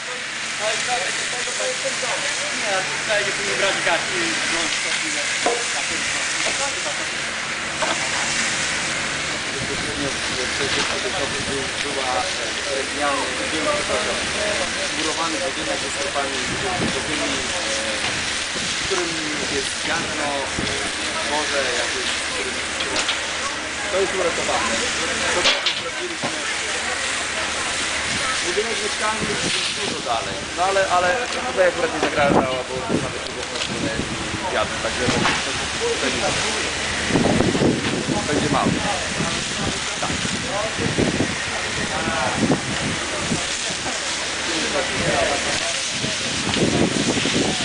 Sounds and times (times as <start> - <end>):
Speech: 0.0 - 7.2, 9.4 - 37.0, 37.8 - 47.6
Fire: 0.0 - 47.6.